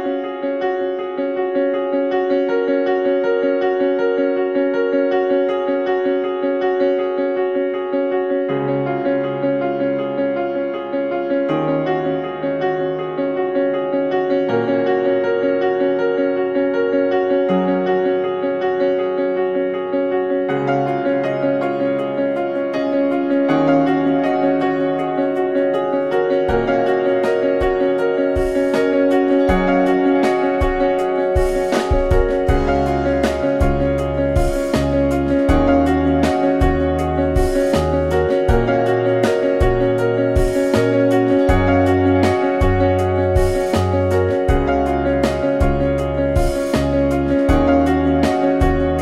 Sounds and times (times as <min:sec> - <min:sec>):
Music: 0:00.0 - 0:49.0.